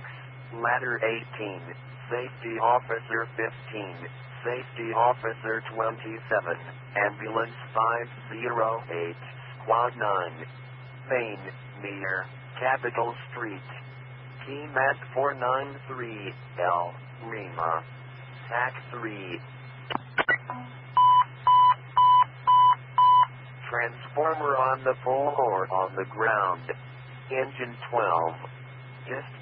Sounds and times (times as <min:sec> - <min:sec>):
Speech: 0:00.1 - 0:10.5, 0:11.1 - 0:13.8, 0:14.4 - 0:17.8, 0:18.5 - 0:19.4, 0:23.6 - 0:28.5, 0:29.1 - 0:29.4.